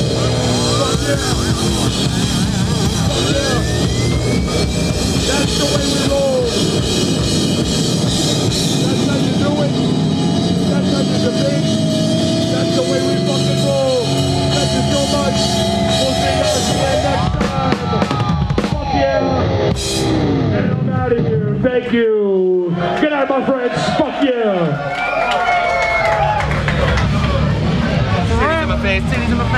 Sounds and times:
Drum: 0.0s - 21.3s, 26.4s - 29.5s
Drum kit: 0.0s - 21.4s, 26.1s - 29.5s
Speech: 3.0s - 3.7s, 5.2s - 6.6s, 8.8s - 9.8s, 10.6s - 11.7s, 12.5s - 18.0s, 18.7s - 19.5s, 20.5s - 24.8s, 28.1s - 29.5s.

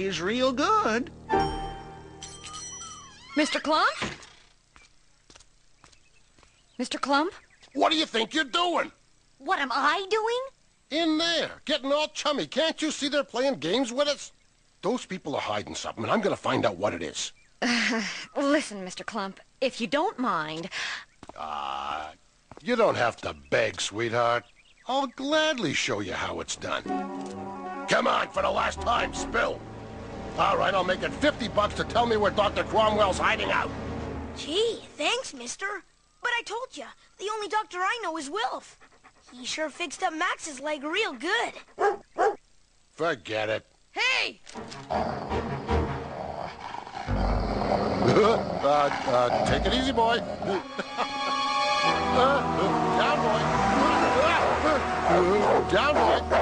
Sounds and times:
Music: 0.0s - 3.2s, 26.6s - 35.0s, 44.6s - 46.3s, 49.5s - 56.4s.

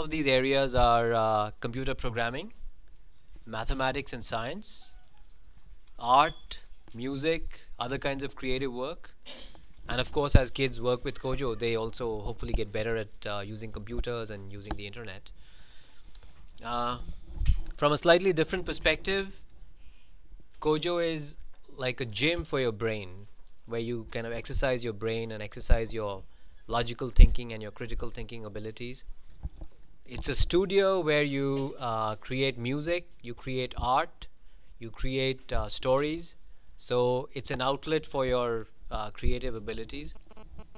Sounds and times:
Speech: 0.0s - 2.6s, 3.4s - 5.0s, 6.0s - 9.2s, 9.9s - 15.3s, 16.6s - 17.1s, 17.8s - 19.4s, 20.6s - 29.1s, 30.1s - 40.2s.

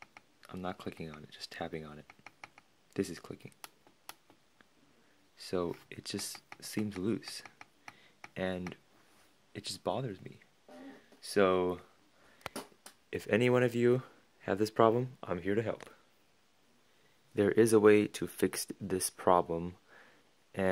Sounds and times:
Speech: 0.5s - 2.1s, 3.0s - 3.6s, 5.4s - 7.5s, 8.4s - 8.8s, 9.6s - 11.9s, 13.1s - 16.0s, 17.4s - 19.8s.

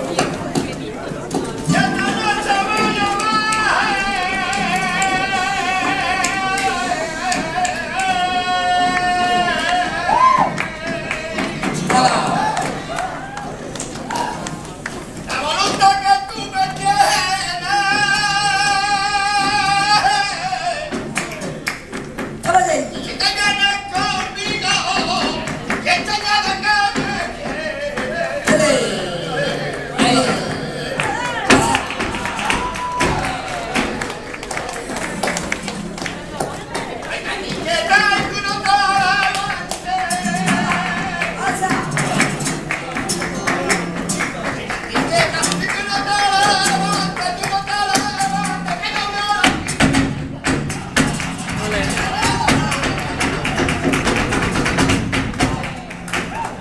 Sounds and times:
Crowd: 0.0s - 56.6s
Music of Latin America: 0.0s - 56.6s
Singing: 1.4s - 56.6s.

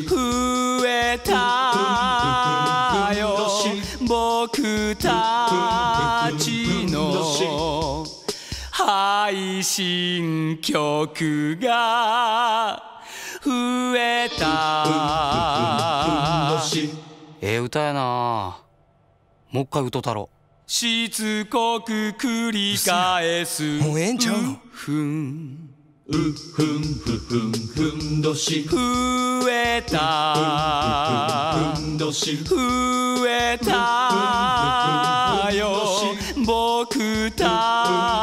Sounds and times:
Music: 0.0s - 11.0s, 13.3s - 17.4s, 26.1s - 38.2s
Speech: 17.4s - 18.6s, 19.5s - 20.3s, 23.7s - 24.6s.

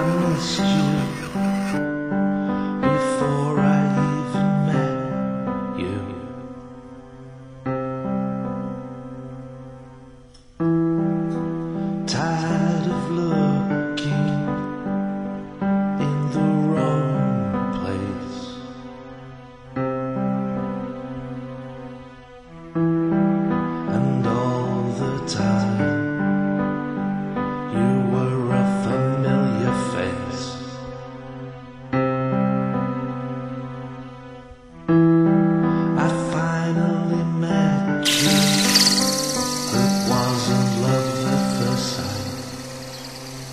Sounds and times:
Music: 0.0s - 43.5s.

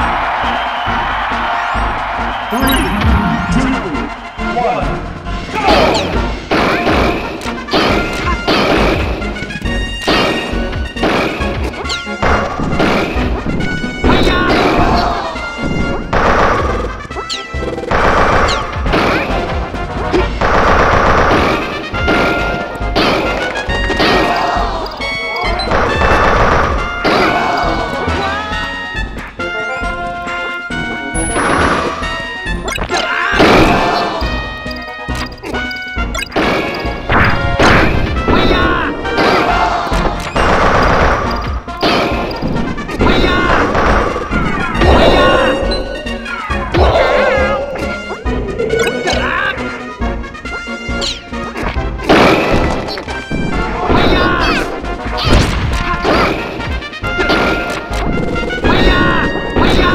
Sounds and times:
Music: 0.0s - 59.9s
Smash, crash: 10.1s - 16.9s, 17.9s - 24.6s, 33.0s - 34.2s, 36.2s - 45.6s, 51.6s - 59.9s.

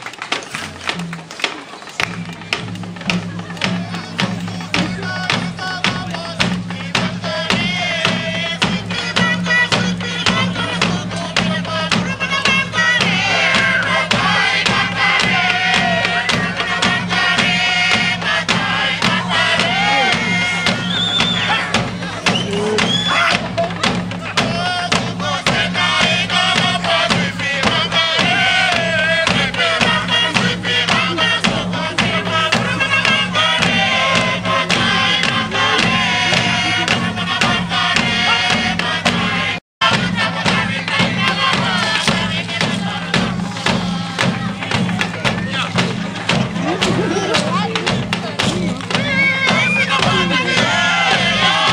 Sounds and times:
Music: 0.0s - 51.7s.

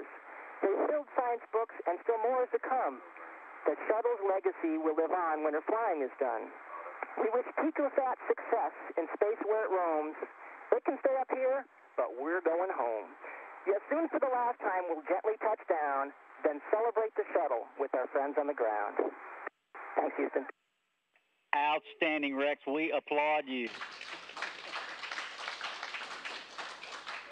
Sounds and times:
Radio: 0.0s - 20.5s, 21.6s - 23.7s.

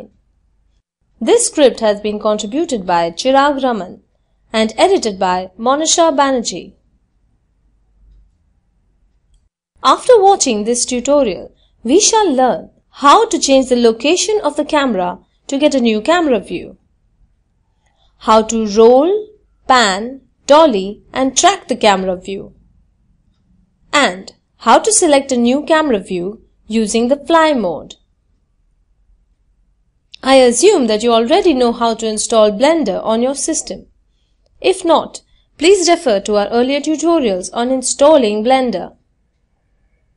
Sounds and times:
Speech: 1.2s - 6.8s, 9.8s - 16.8s, 18.2s - 22.6s, 23.9s - 28.0s, 30.2s - 33.9s, 34.6s - 39.0s.

